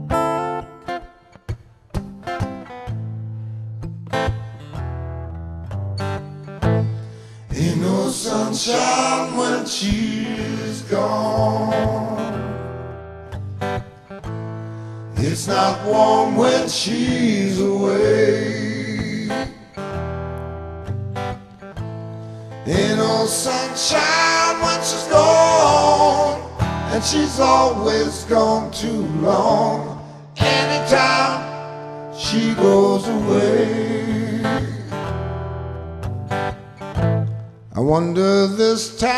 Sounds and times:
Music: 0:00.0 - 0:39.1.

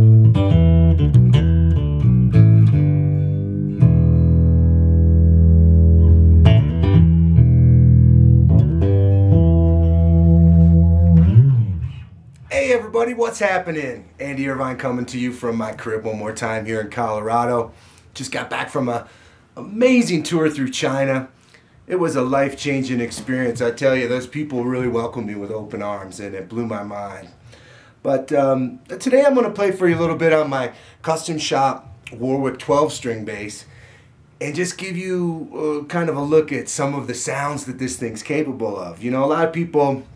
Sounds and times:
Speech: 0:12.5 - 0:21.3, 0:21.9 - 0:27.4, 0:28.0 - 0:33.7, 0:34.4 - 0:40.1.

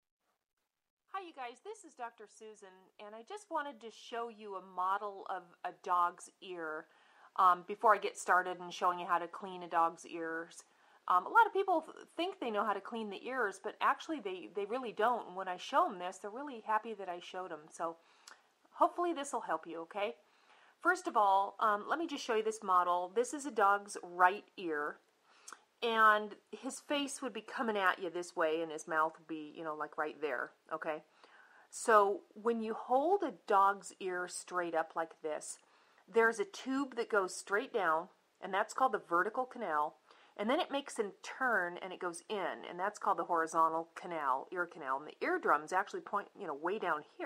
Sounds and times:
Speech: 0:01.2 - 0:18.0, 0:18.8 - 0:20.2, 0:20.8 - 0:25.0, 0:25.8 - 0:31.0, 0:31.7 - 0:47.2.

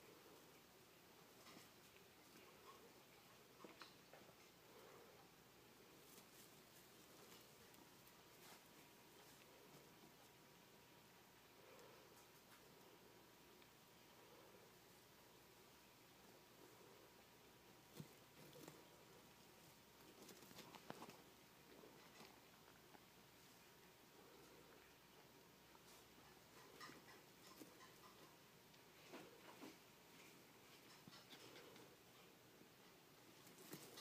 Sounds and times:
Silence: 0:00.0 - 0:34.0.

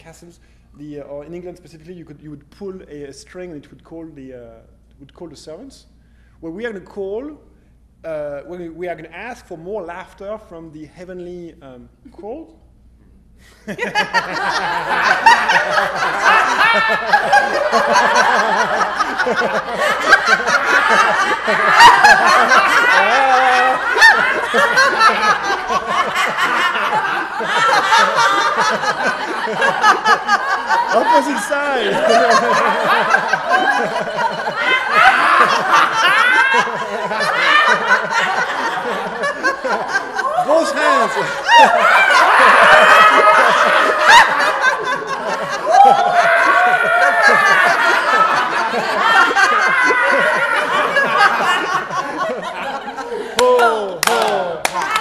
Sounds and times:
Speech: 0:00.0 - 0:07.5, 0:08.1 - 0:12.6, 0:30.9 - 0:32.6, 0:40.4 - 0:41.3, 0:53.4 - 0:54.6
Snicker: 0:13.6 - 0:55.0.

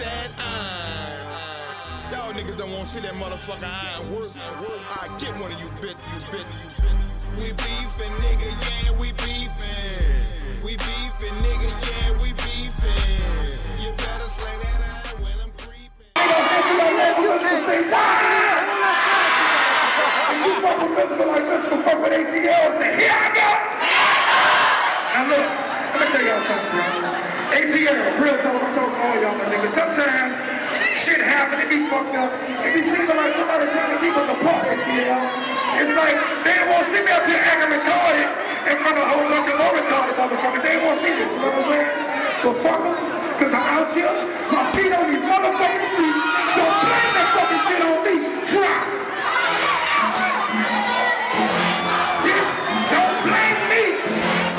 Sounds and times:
Hip hop music: 0:00.0 - 0:54.5
Inside, large room or hall: 0:00.0 - 0:54.5.

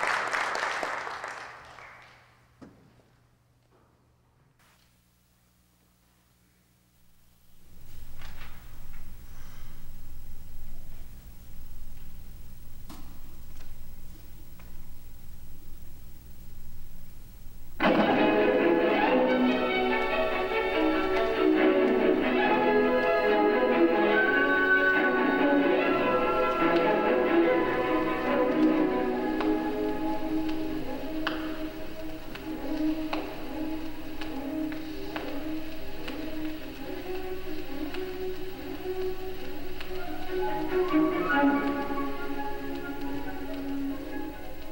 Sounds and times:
Piano: 0:07.6 - 0:44.7.

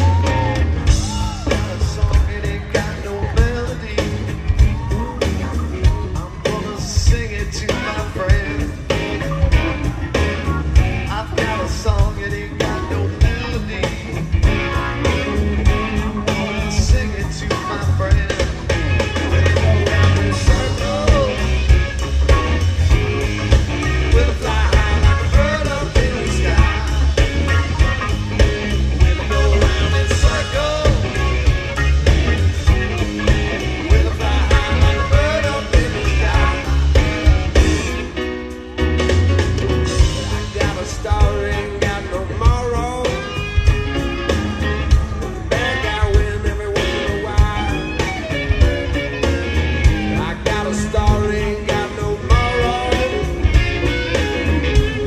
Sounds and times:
Rock and roll: 0:00.0 - 0:55.0.

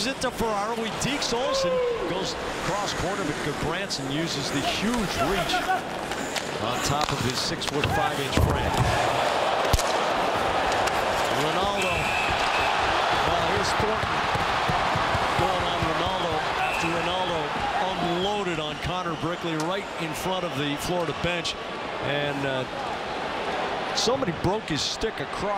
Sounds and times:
Speech: 0:00.0 - 0:05.8, 0:06.6 - 0:08.8, 0:15.4 - 0:22.7, 0:24.0 - 0:25.5.

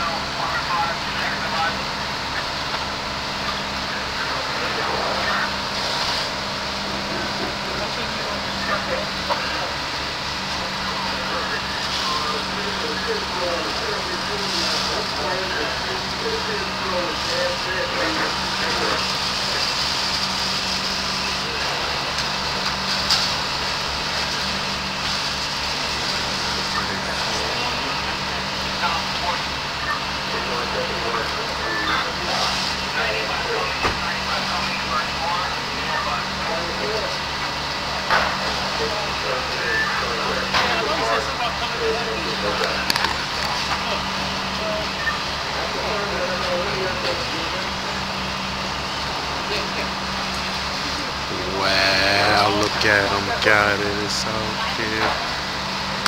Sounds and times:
Speech: 0:00.0 - 0:02.5, 0:03.4 - 0:05.8, 0:06.9 - 0:09.9, 0:10.6 - 0:19.8, 0:20.4 - 0:22.2, 0:25.8 - 0:37.3, 0:38.4 - 0:48.2, 0:50.9 - 0:55.3.

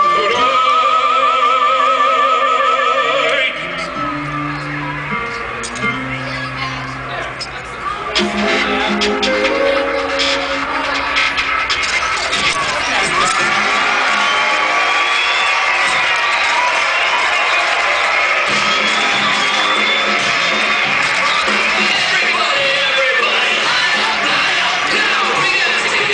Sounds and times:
Music: 0:00.0 - 0:26.1.

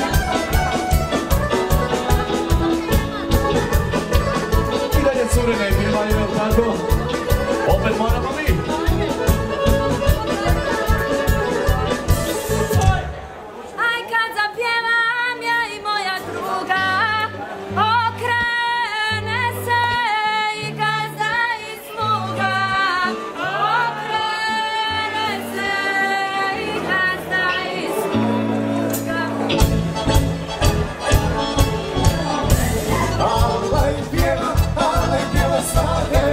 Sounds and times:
Music: 0:00.0 - 0:13.3, 0:14.8 - 0:36.3.

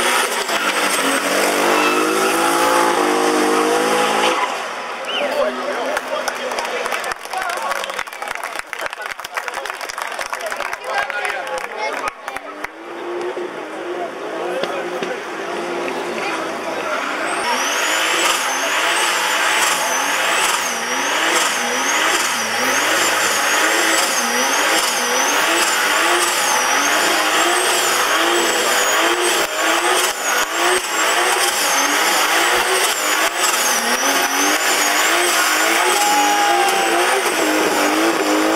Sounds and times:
Skidding: 0:11.2 - 0:38.5.

